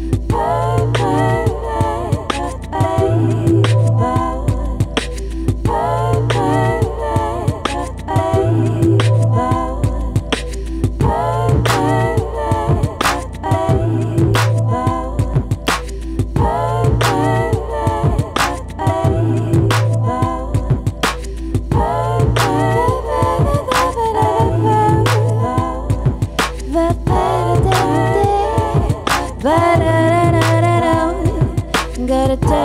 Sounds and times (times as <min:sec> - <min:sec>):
Beatboxing: 0:00.0 - 0:32.6
Rhythm and blues: 0:00.0 - 0:32.6
Soul music: 0:00.0 - 0:32.6.